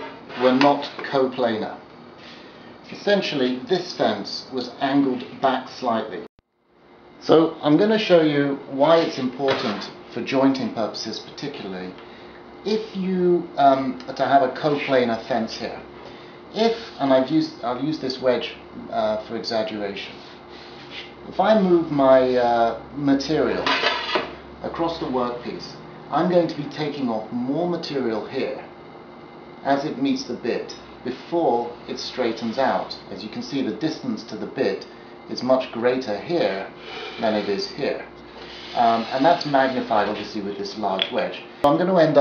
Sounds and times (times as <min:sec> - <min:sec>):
Speech: 0:00.3 - 0:01.8, 0:02.9 - 0:06.3, 0:07.2 - 0:12.0, 0:12.6 - 0:15.9, 0:16.6 - 0:20.2, 0:21.3 - 0:23.8, 0:24.6 - 0:28.7, 0:29.6 - 0:38.1, 0:38.8 - 0:42.2.